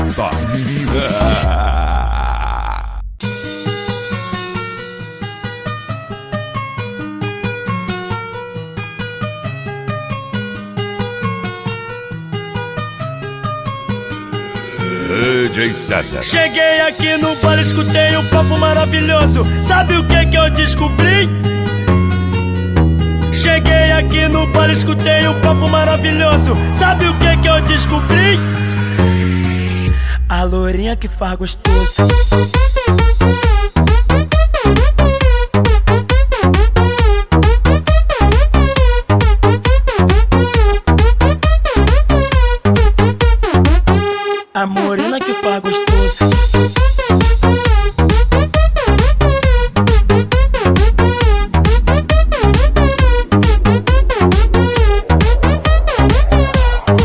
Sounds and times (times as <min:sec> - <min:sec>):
Music: 0:00.0 - 0:01.8, 0:03.2 - 0:57.0
Speech: 0:00.0 - 0:02.1, 0:14.8 - 0:16.9, 0:30.3 - 0:31.7, 0:44.6 - 0:45.8.